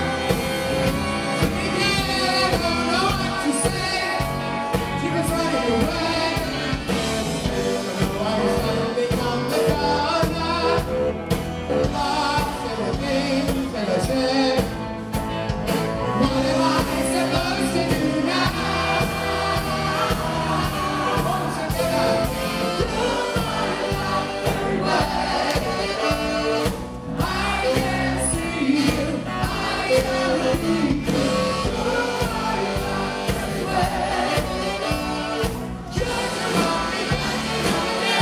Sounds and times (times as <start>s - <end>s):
Music: 0.0s - 38.2s.